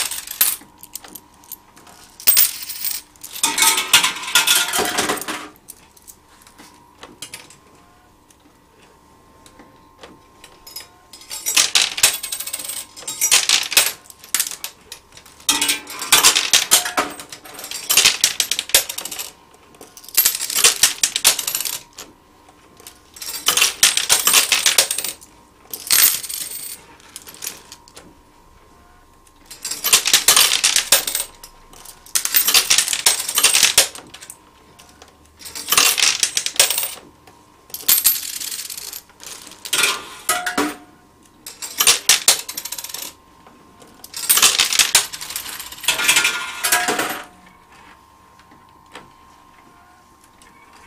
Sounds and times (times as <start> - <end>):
Coin (dropping): 0.0 - 1.1, 2.2 - 5.6, 10.7 - 22.0, 23.2 - 27.8, 29.5 - 34.0, 35.4 - 37.0, 37.8 - 40.8, 41.5 - 43.2, 44.1 - 47.3.